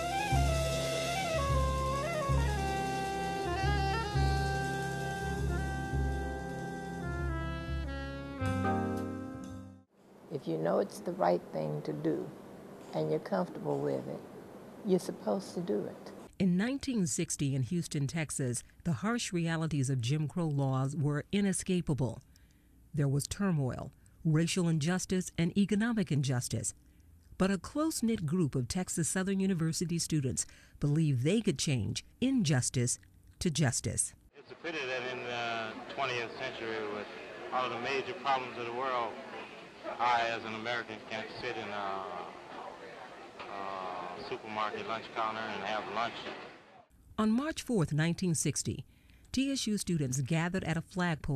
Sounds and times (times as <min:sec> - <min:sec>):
Speech: 0:10.4 - 0:14.2, 0:14.9 - 0:22.2, 0:23.0 - 0:26.8, 0:27.4 - 0:46.4, 0:47.2 - 0:51.3.